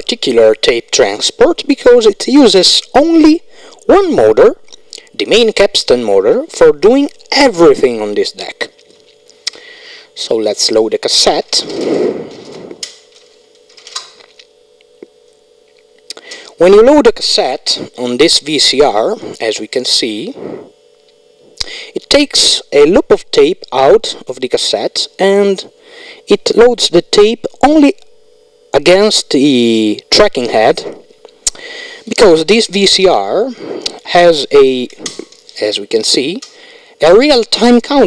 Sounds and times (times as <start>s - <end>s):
Speech: 0.0s - 4.6s, 5.2s - 8.8s, 10.2s - 11.7s, 16.6s - 20.4s, 22.0s - 25.7s, 26.3s - 28.0s, 28.7s - 31.0s, 32.1s - 35.0s, 35.6s - 36.4s, 37.0s - 38.0s.